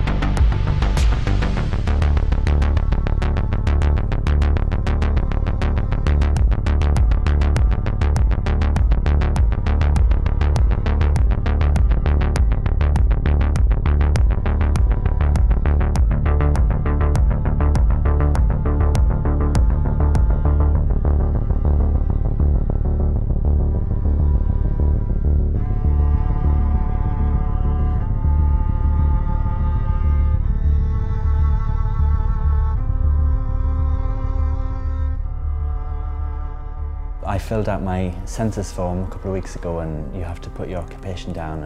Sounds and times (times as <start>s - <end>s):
Music: 0.0s - 41.6s.